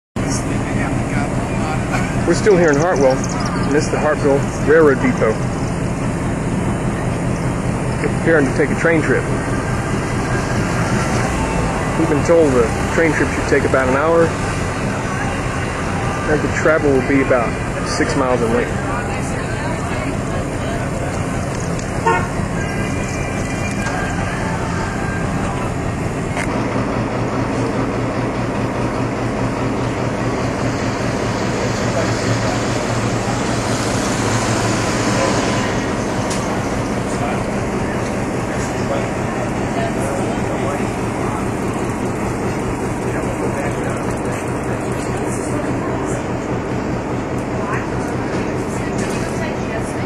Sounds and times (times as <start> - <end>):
Speech: 0.2 - 5.4, 8.0 - 9.3, 11.9 - 14.4, 15.0 - 21.4, 42.9 - 46.4
Train: 0.2 - 50.0.